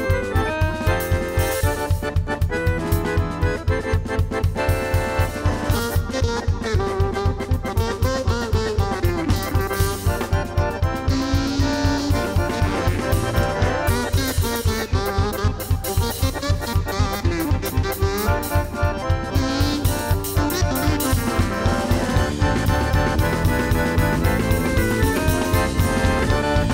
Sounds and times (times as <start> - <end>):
Accordion: 0.0 - 26.7
Percussion: 0.0 - 26.7.